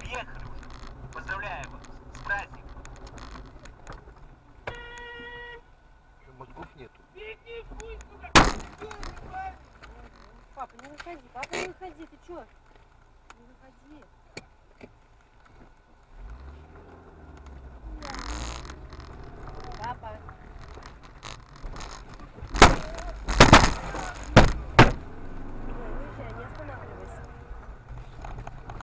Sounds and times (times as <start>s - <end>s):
Outside, urban or manmade: 0.0s - 28.8s
Vehicle: 0.0s - 28.8s.